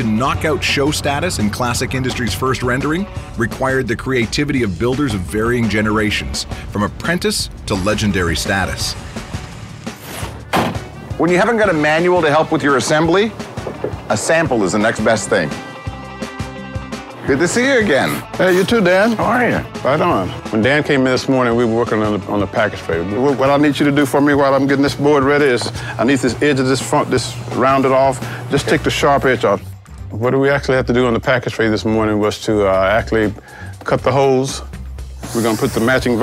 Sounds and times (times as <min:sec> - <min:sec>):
Speech: 0:00.0 - 0:09.0, 0:11.2 - 0:13.3, 0:14.1 - 0:15.6, 0:17.2 - 0:34.7, 0:35.3 - 0:36.2
Music: 0:00.0 - 0:36.2.